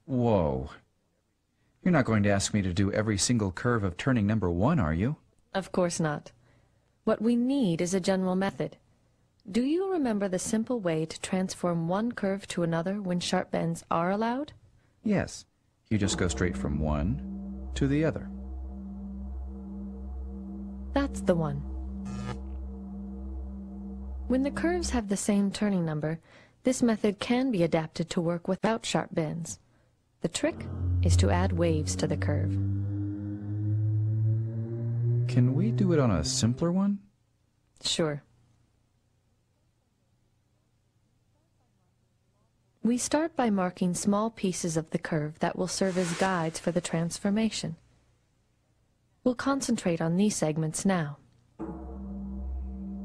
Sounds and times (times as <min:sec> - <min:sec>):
Speech: 0:00.0 - 0:00.9, 0:01.8 - 0:06.3, 0:07.1 - 0:08.8, 0:09.5 - 0:17.2, 0:21.0 - 0:21.6, 0:24.3 - 0:29.6, 0:30.2 - 0:32.6, 0:35.3 - 0:37.1, 0:37.8 - 0:38.3, 0:42.8 - 0:47.8, 0:49.2 - 0:51.3.